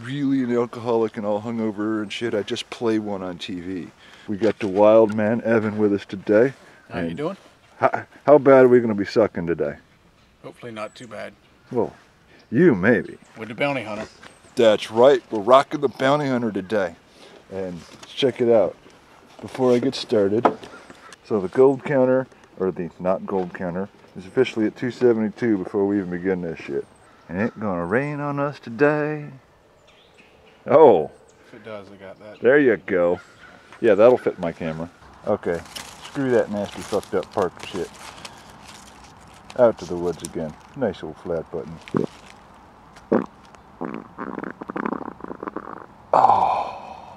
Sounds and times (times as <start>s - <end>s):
Speech: 0.0s - 9.8s, 10.5s - 18.8s, 19.4s - 20.5s, 21.2s - 29.4s, 30.7s - 33.2s, 33.8s - 38.0s, 39.5s - 42.1s
Stomach rumble: 43.0s - 46.7s.